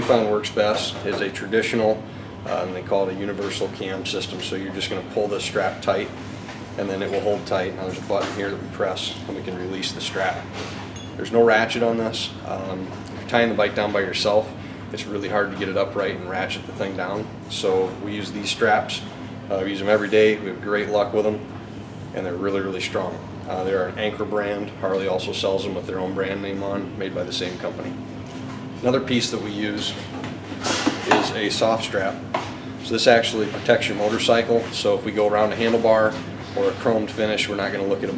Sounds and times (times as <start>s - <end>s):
Speech: 0.0s - 6.2s, 6.8s - 10.5s, 11.2s - 21.5s, 22.1s - 28.0s, 28.8s - 30.2s, 30.9s - 32.2s, 32.8s - 38.1s.